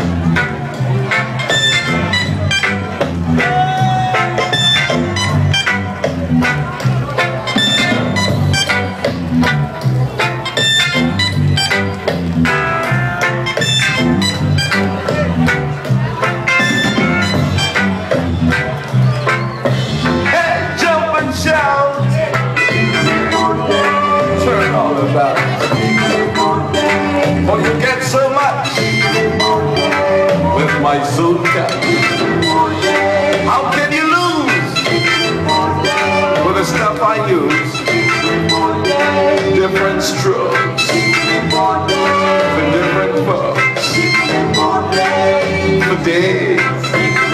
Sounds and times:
Music: 0.0 - 47.3
Speech: 20.2 - 22.6, 36.4 - 37.7.

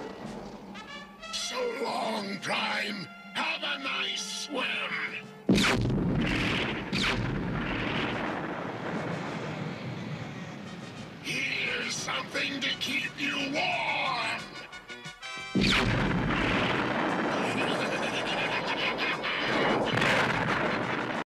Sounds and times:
Music: 0.0 - 21.2
Speech: 1.4 - 5.2, 11.2 - 14.6.

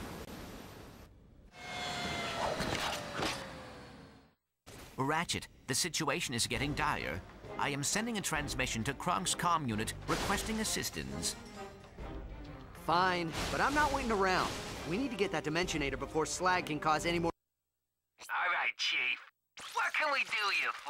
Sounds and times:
Speech: 5.0 - 11.4, 12.8 - 17.4, 18.2 - 20.8
Music: 6.5 - 17.3.

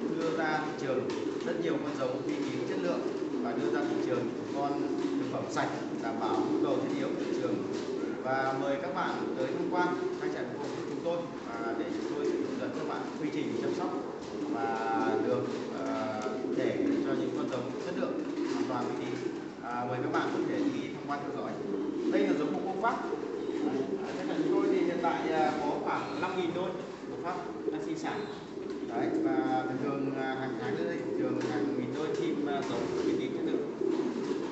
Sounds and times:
Speech: 0.0 - 33.8
Pigeon, dove: 0.0 - 34.5.

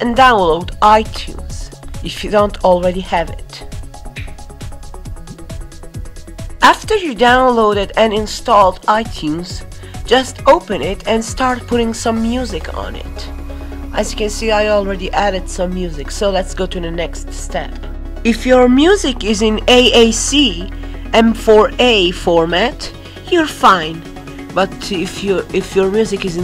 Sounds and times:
Speech: 0.0 - 3.6, 6.6 - 13.3, 14.0 - 24.0, 24.6 - 26.4
Music: 0.0 - 26.4.

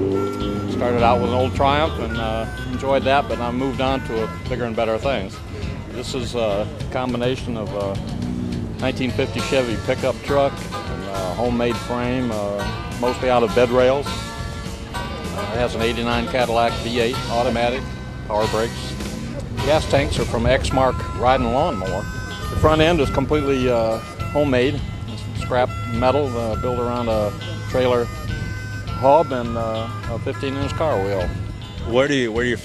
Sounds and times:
Music: 0.0 - 32.6.

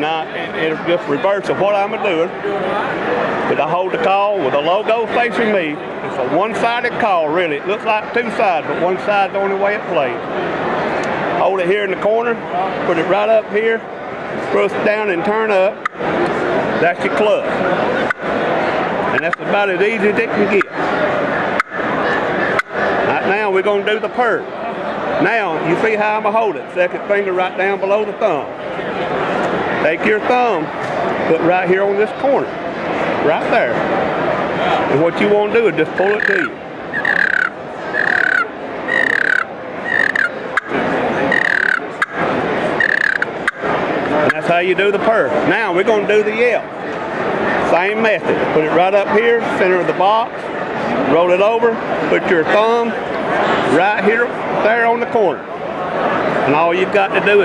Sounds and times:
Speech: 0.0 - 10.2, 11.4 - 15.8, 16.8 - 18.0, 19.1 - 20.8, 23.1 - 29.1, 29.8 - 32.5, 33.2 - 33.8, 34.6 - 36.6, 44.1 - 46.7, 47.6 - 50.3, 50.9 - 55.6, 56.4 - 57.4.

